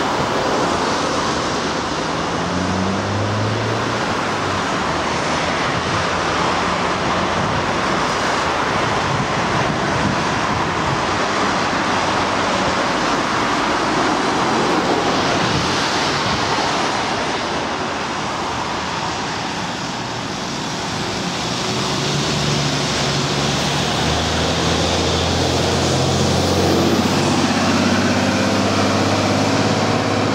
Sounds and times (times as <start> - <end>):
Bus: 0.0 - 30.3.